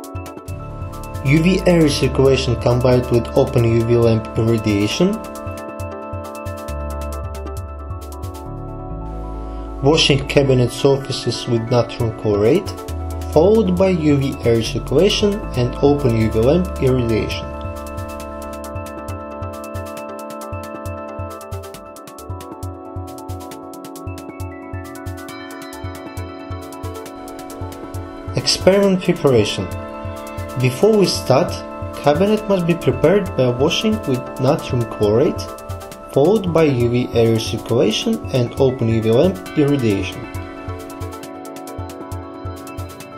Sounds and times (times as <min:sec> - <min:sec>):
Narration, monologue: 0:00.3 - 0:24.0, 0:24.9 - 0:43.1.